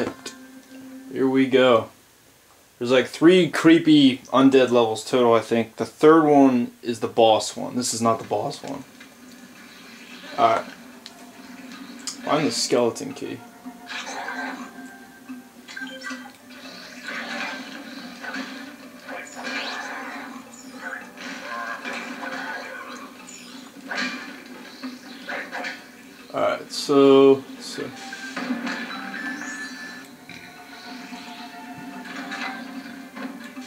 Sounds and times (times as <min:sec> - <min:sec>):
Speech: 0:01.1 - 0:01.9, 0:02.8 - 0:08.8, 0:10.4 - 0:10.7, 0:12.1 - 0:13.4, 0:26.3 - 0:28.0.